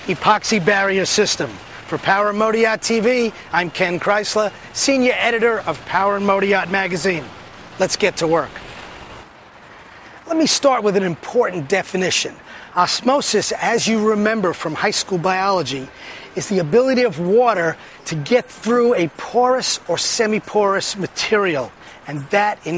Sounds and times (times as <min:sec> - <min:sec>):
Speech: 0:00.0 - 0:08.6, 0:10.2 - 0:22.7.